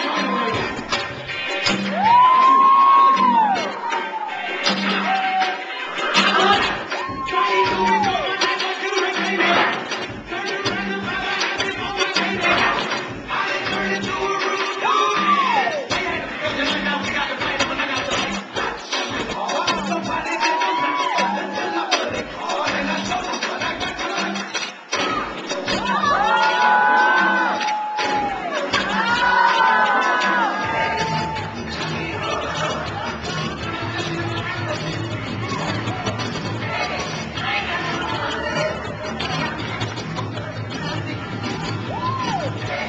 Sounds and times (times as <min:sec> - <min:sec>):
Music: 0:00.0 - 0:42.8
Singing: 0:00.0 - 0:42.8.